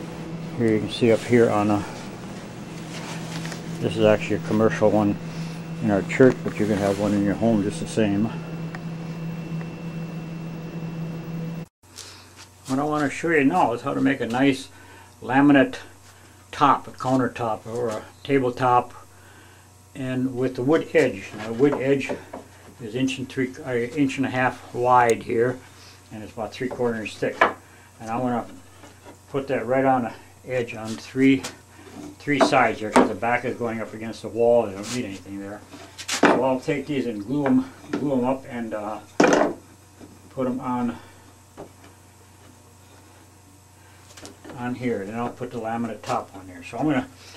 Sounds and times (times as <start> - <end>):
Speech: 0.6 - 2.0, 3.8 - 5.2, 5.8 - 8.4, 12.7 - 15.9, 16.5 - 19.0, 20.0 - 28.6, 29.3 - 31.6, 32.2 - 35.7, 36.3 - 39.1, 40.4 - 41.1, 44.5 - 47.1.